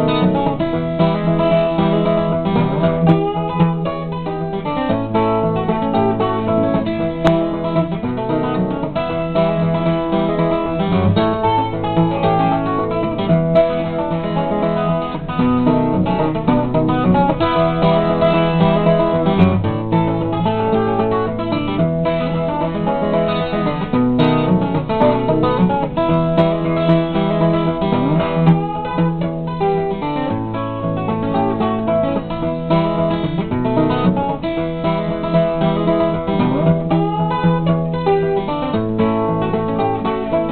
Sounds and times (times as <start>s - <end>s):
Music: 0.0s - 40.5s.